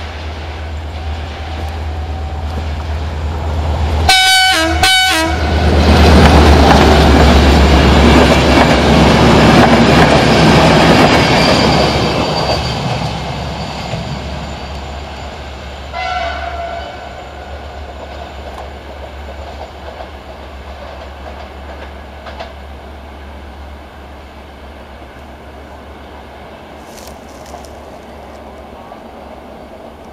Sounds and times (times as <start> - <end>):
Railroad car, train wagon: 0.0 - 30.1
Train horn: 4.1 - 5.5, 15.9 - 17.6
Clickety-clack: 6.1 - 13.1, 17.9 - 22.6.